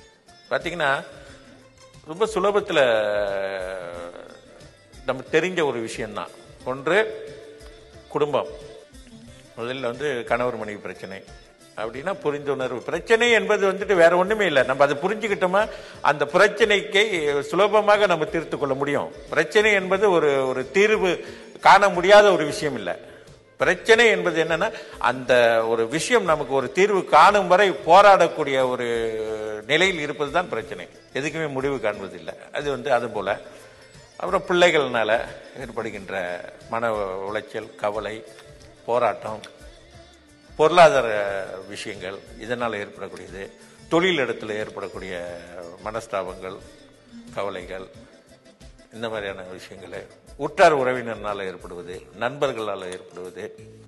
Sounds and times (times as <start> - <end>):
Music: 0.0 - 53.8
Narration, monologue: 0.0 - 53.8
Male speech, man speaking: 0.5 - 1.1, 2.1 - 4.4, 5.1 - 7.3, 8.1 - 8.6, 9.6 - 23.0, 23.6 - 33.4, 34.2 - 38.3, 38.9 - 39.5, 40.6 - 46.6, 47.4 - 47.9, 49.0 - 53.6.